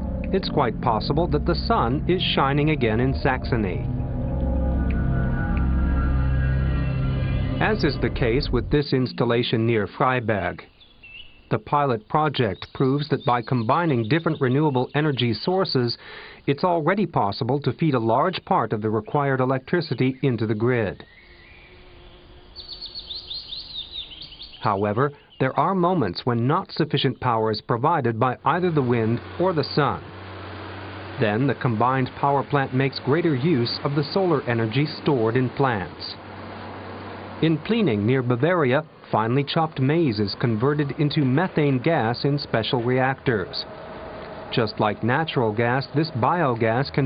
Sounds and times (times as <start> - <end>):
Chirp, tweet: 10.7 - 11.6, 12.4 - 15.5, 19.1 - 25.8.